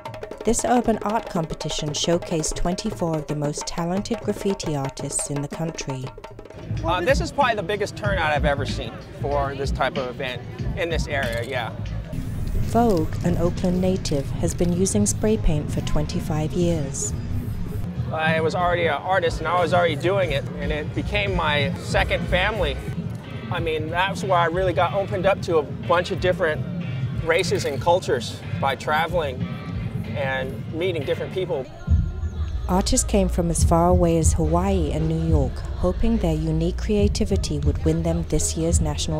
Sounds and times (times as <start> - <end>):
Music: 0.0 - 39.1.